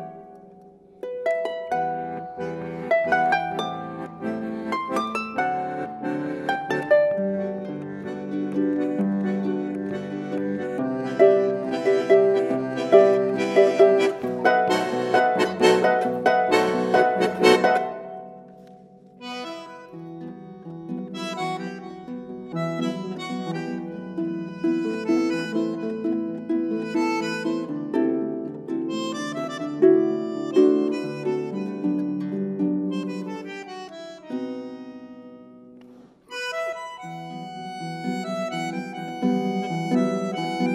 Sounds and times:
Pizzicato: 0.0s - 33.2s
Accordion: 0.0s - 40.7s
Harp: 0.0s - 40.7s.

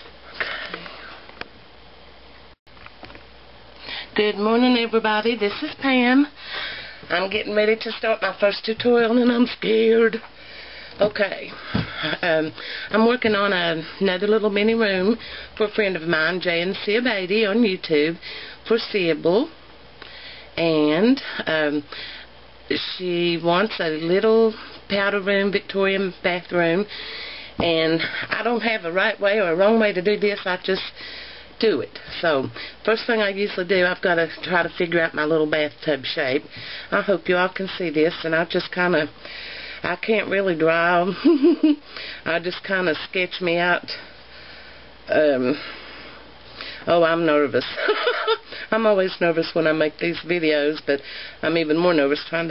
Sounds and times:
Speech: 4.2s - 6.3s, 7.1s - 10.2s, 11.0s - 19.6s, 20.6s - 21.9s, 22.7s - 26.9s, 27.6s - 30.9s, 31.6s - 39.1s, 39.9s - 41.2s, 42.3s - 44.0s, 45.1s - 45.6s, 46.9s - 47.8s, 48.7s - 52.5s.

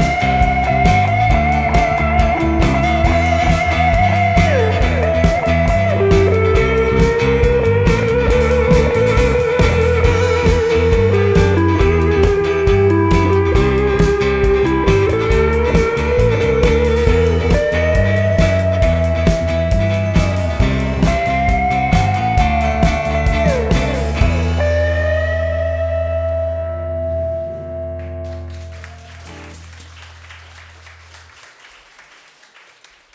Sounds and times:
Steel guitar, slide guitar: 0.0s - 29.6s.

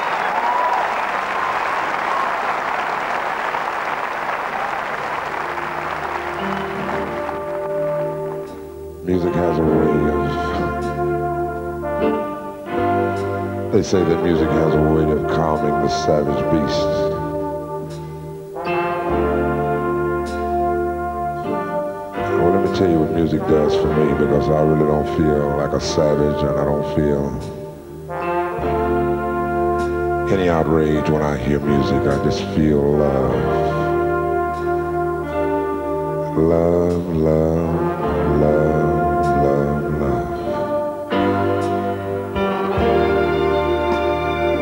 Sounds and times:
Brass instrument: 0.0s - 44.6s.

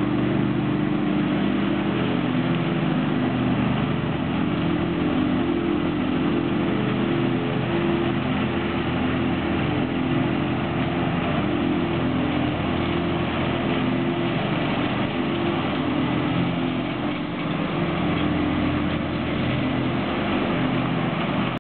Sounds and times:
Lawn mower: 0.0s - 21.6s
Vehicle: 0.0s - 21.6s.

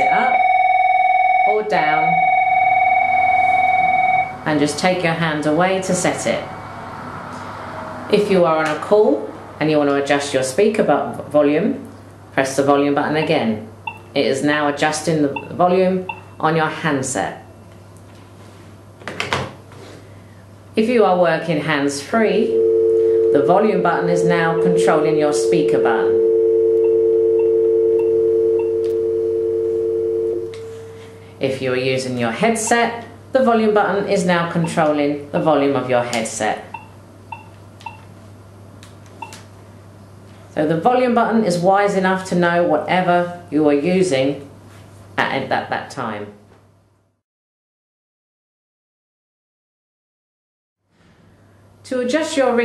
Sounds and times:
Speech: 1.5s - 2.2s, 12.4s - 17.4s, 20.8s - 22.5s, 31.4s - 36.7s, 40.6s - 44.5s, 45.2s - 46.4s, 51.9s - 52.6s.

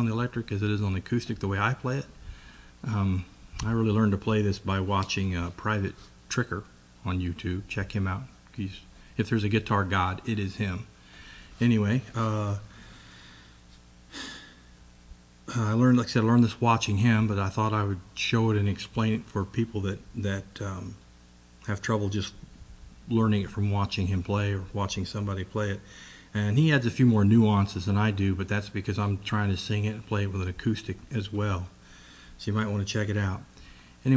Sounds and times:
Speech: 0.0s - 2.2s, 2.8s - 10.9s, 11.6s - 12.7s, 15.5s - 21.0s, 21.6s - 22.4s, 23.1s - 31.8s, 32.4s - 34.1s.

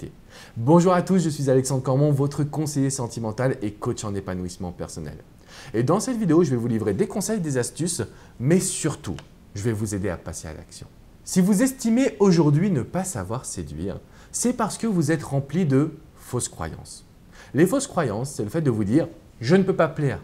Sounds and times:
Speech: 0.0s - 20.2s.

